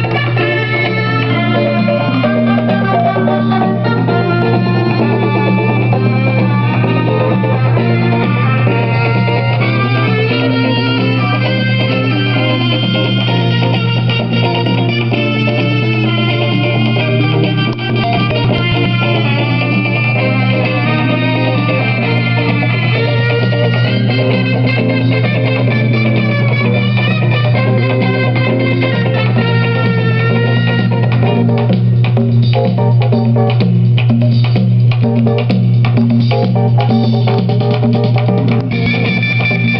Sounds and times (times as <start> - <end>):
Music: 0.0 - 39.7.